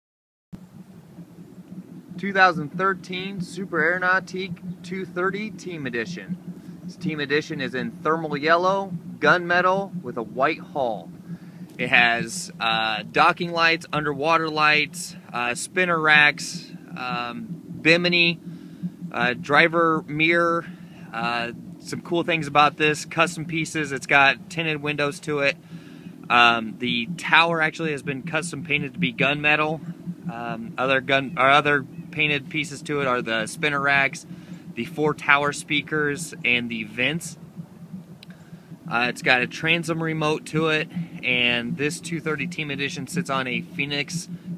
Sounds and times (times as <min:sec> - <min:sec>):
Speech: 0:02.2 - 0:06.4, 0:07.0 - 0:11.1, 0:11.8 - 0:18.4, 0:19.2 - 0:25.6, 0:26.3 - 0:34.2, 0:34.8 - 0:37.4, 0:38.9 - 0:44.3.